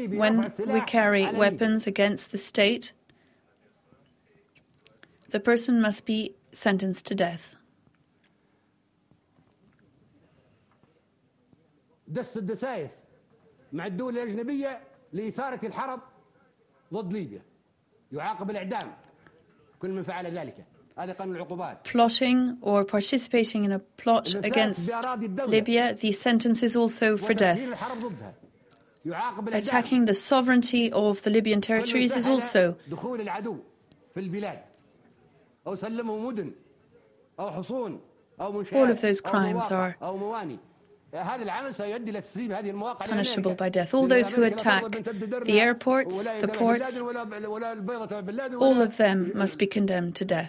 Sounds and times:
Male speech, man speaking: 0.0s - 2.2s, 12.0s - 16.2s, 16.8s - 17.5s, 18.1s - 21.9s, 24.1s - 26.2s, 27.1s - 28.4s, 29.0s - 30.2s, 31.3s - 34.7s, 35.6s - 50.0s
Narration, monologue: 0.0s - 11.3s, 12.0s - 36.7s, 37.4s - 50.4s.

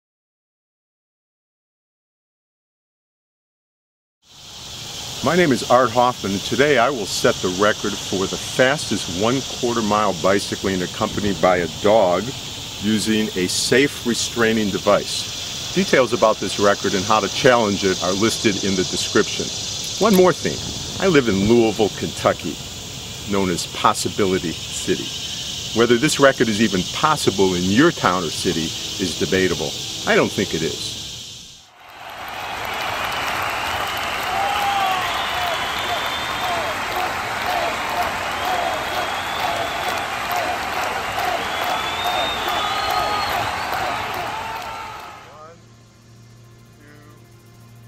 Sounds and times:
Speech: 5.2s - 22.6s, 23.3s - 25.2s, 25.8s - 31.0s, 45.3s - 45.6s, 46.8s - 47.2s.

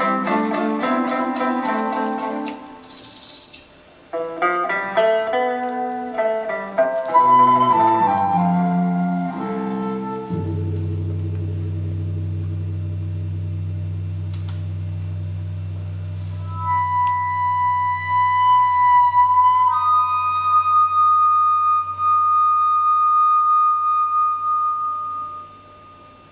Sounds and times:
Classical music: 0.0s - 3.2s, 4.6s - 13.4s.

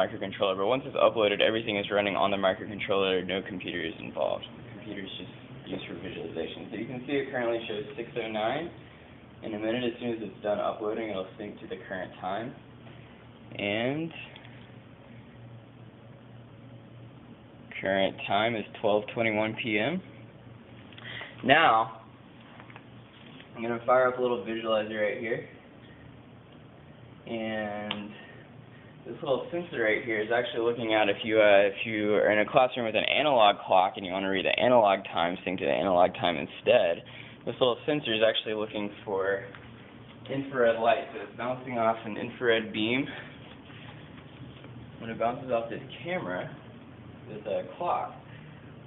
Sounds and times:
Speech: 0.0s - 8.8s, 9.4s - 12.6s, 13.5s - 14.4s, 17.7s - 20.2s, 21.4s - 22.1s, 23.6s - 25.6s, 27.3s - 28.3s, 29.0s - 39.6s, 40.2s - 43.3s, 45.0s - 46.7s, 47.3s - 48.3s.

